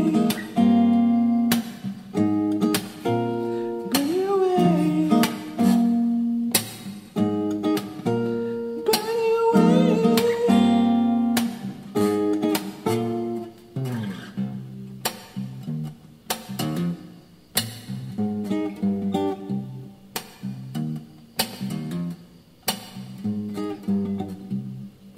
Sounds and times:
Strum: 0:00.0 - 0:25.1
Singing: 0:03.9 - 0:05.9, 0:08.8 - 0:11.1.

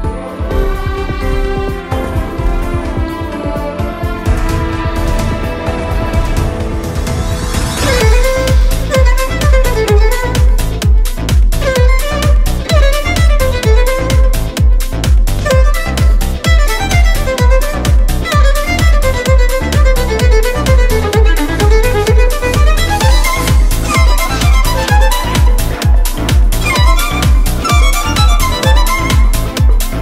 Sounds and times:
Dance music: 0:00.0 - 0:30.0.

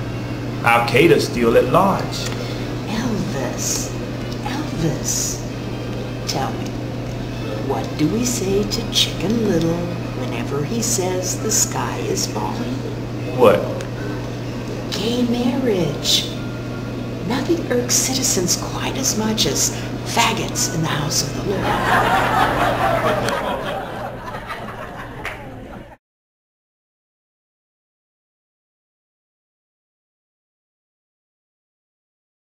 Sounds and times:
Speech: 0:00.6 - 0:02.3, 0:02.9 - 0:05.4, 0:07.6 - 0:13.9, 0:15.0 - 0:16.4, 0:17.2 - 0:21.7.

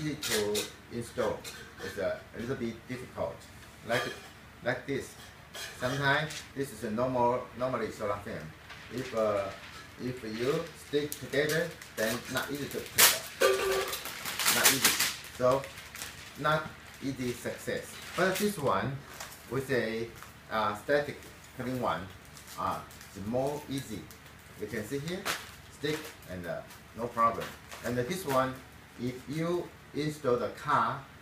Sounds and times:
Speech: 0:00.0 - 0:05.2, 0:05.8 - 0:13.3, 0:14.5 - 0:15.7, 0:16.4 - 0:31.2.

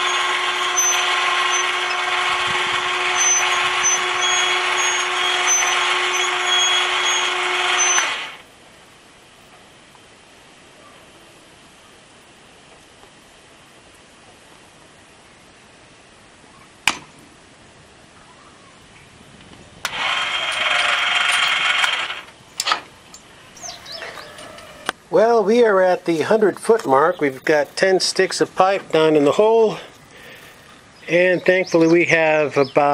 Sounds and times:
Speech: 0:25.1 - 0:29.9, 0:31.0 - 0:32.9.

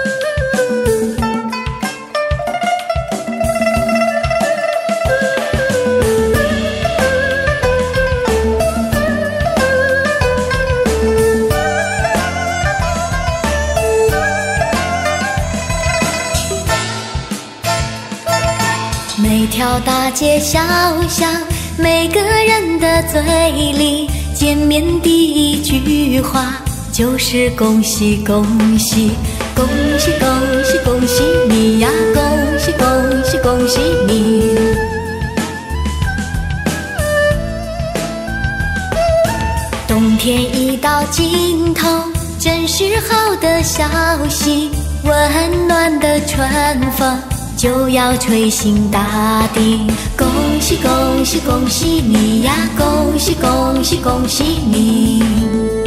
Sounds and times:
Music: 0:00.0 - 0:55.8.

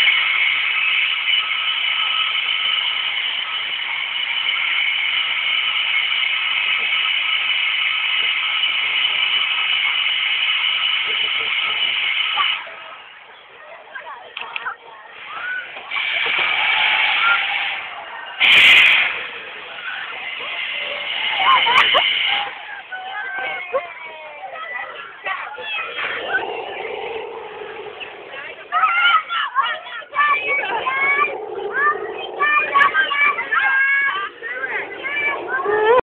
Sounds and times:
Speech: 0:12.3 - 0:16.3, 0:19.2 - 0:36.0
Gurgling: 0:25.5 - 0:36.0.

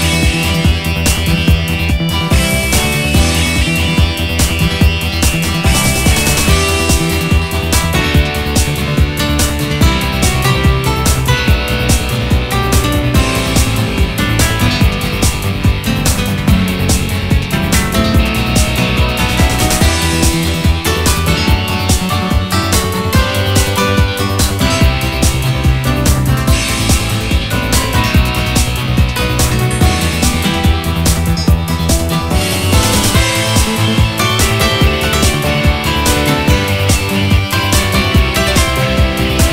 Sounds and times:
Background music: 0:00.0 - 0:39.5
Blues: 0:00.0 - 0:39.5.

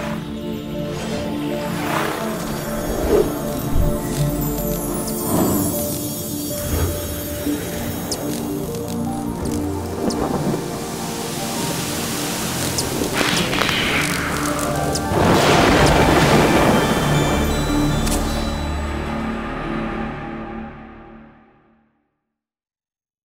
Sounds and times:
Sound effect: 0:00.0 - 0:10.6, 0:12.6 - 0:21.8
Music: 0:00.0 - 0:22.2.

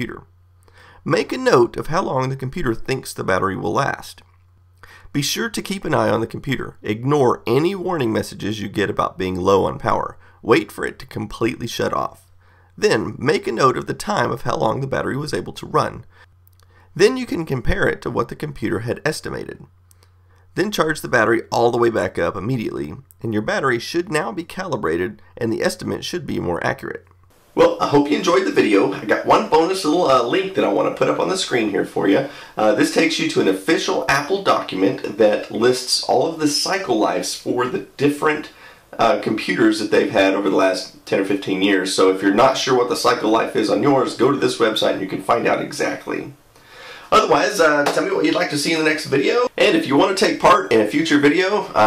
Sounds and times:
Speech: 0:00.0 - 0:00.3, 0:01.0 - 0:04.3, 0:05.1 - 0:16.1, 0:17.0 - 0:19.7, 0:20.6 - 0:46.4, 0:47.1 - 0:51.8.

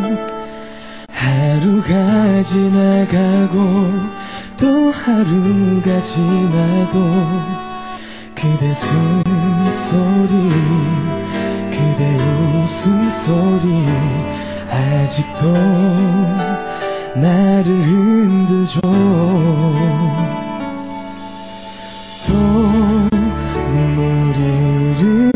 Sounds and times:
Music: 0:00.0 - 0:25.3
Male singing: 0:01.1 - 0:20.4, 0:22.2 - 0:25.3.

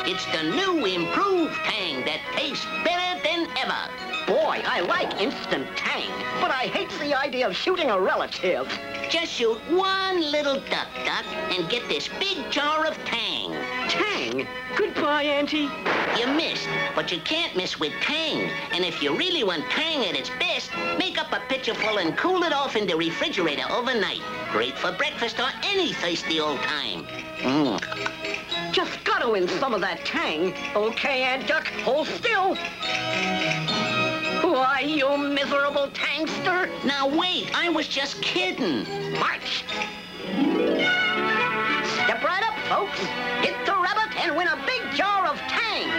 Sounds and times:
Music: 0:00.0 - 0:45.9.

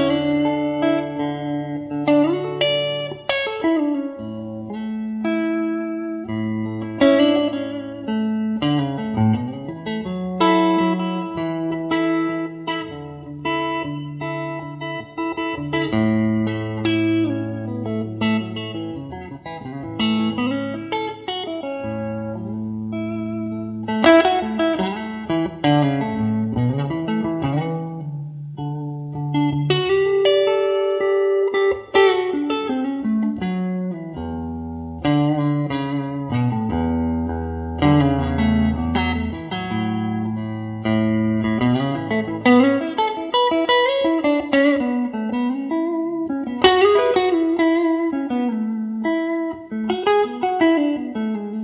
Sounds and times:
Guitar: 0:00.0 - 0:51.6
Inside, small room: 0:00.0 - 0:51.6.

